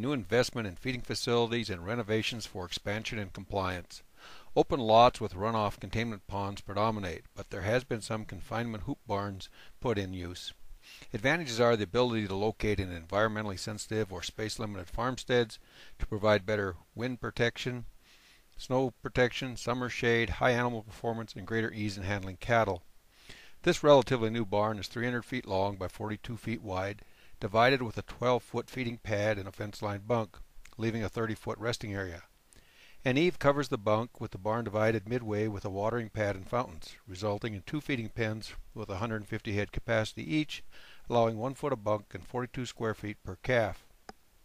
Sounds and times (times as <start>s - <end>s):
Speech: 0.0s - 4.0s, 4.6s - 17.9s, 18.6s - 22.8s, 23.6s - 32.3s, 33.0s - 43.9s.